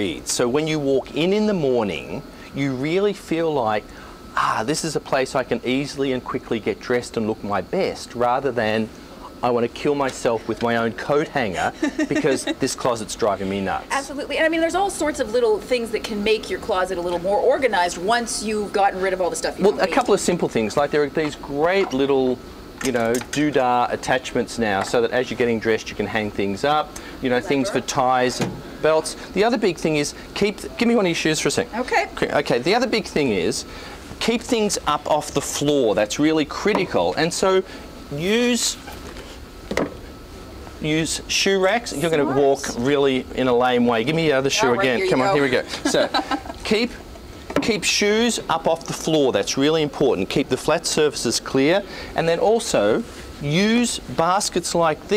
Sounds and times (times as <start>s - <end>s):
Speech: 4.4s - 33.6s, 40.8s - 47.0s.